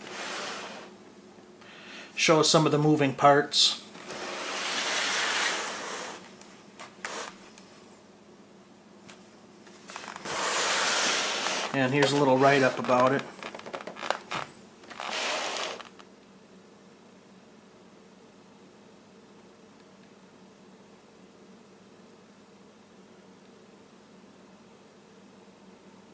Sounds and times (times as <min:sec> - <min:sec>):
Speech: 0:02.2 - 0:03.9, 0:11.8 - 0:13.3.